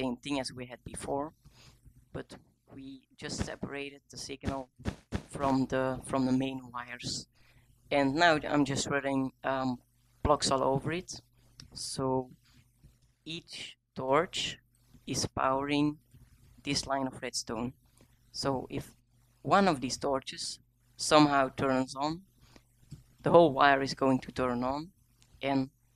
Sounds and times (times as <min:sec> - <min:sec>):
Speech: 0:00.0 - 0:01.4, 0:02.2 - 0:04.7, 0:05.3 - 0:07.3, 0:07.9 - 0:12.4, 0:13.3 - 0:16.0, 0:16.7 - 0:17.8, 0:18.4 - 0:22.2, 0:23.2 - 0:25.7.